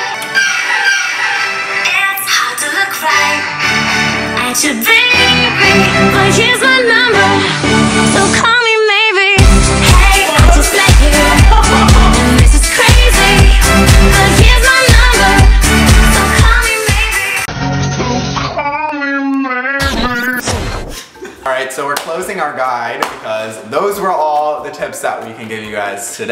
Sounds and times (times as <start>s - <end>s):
Music: 0.0s - 18.6s, 23.8s - 26.3s.